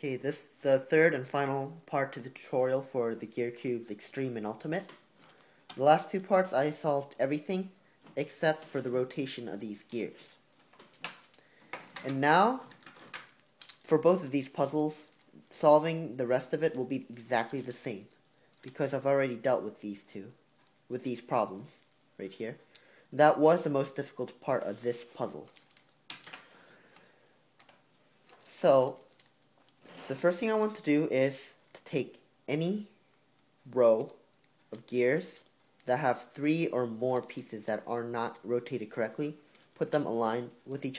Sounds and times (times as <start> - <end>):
Speech: 0.0 - 5.0, 5.7 - 10.4, 12.0 - 12.7, 13.8 - 22.6, 23.2 - 25.6, 28.5 - 29.0, 30.1 - 33.0, 33.6 - 40.9.